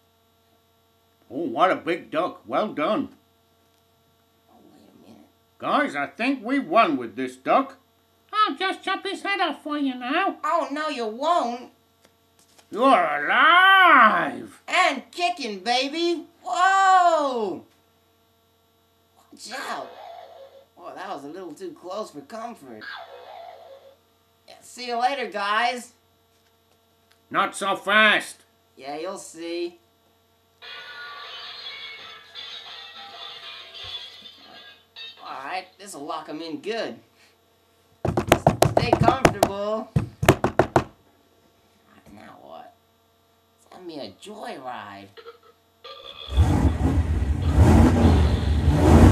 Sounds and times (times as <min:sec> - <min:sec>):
Speech: 0:01.3 - 0:03.2, 0:04.6 - 0:11.8, 0:12.7 - 0:17.7, 0:20.8 - 0:22.9, 0:24.5 - 0:26.0, 0:27.3 - 0:29.8, 0:35.2 - 0:37.0, 0:38.8 - 0:39.9, 0:42.0 - 0:42.8, 0:43.6 - 0:45.2.